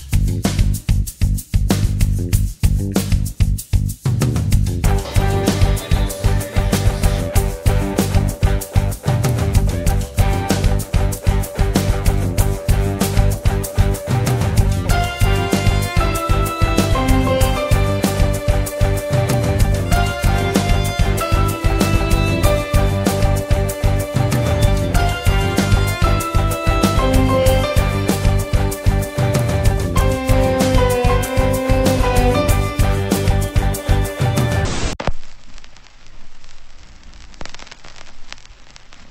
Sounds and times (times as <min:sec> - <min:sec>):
Bass drum: 0:00.0 - 0:34.6
Drum kit: 0:00.0 - 0:35.2.